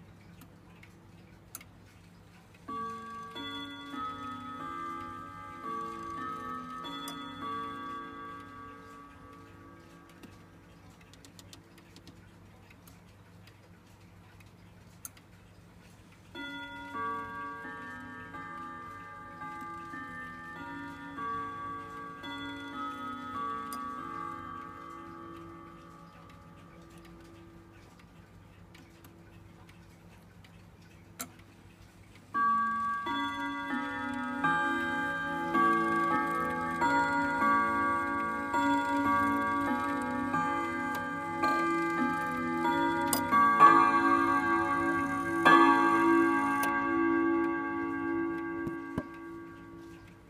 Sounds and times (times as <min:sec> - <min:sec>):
Tick-tock: 0:00.0 - 0:15.6, 0:16.4 - 0:50.3.